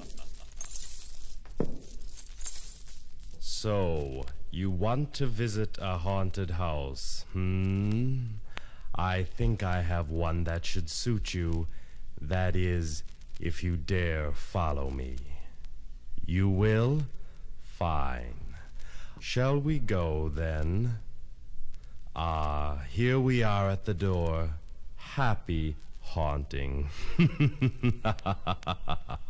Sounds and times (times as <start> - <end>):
Speech: 3.4 - 15.5, 16.2 - 21.1, 22.2 - 27.0.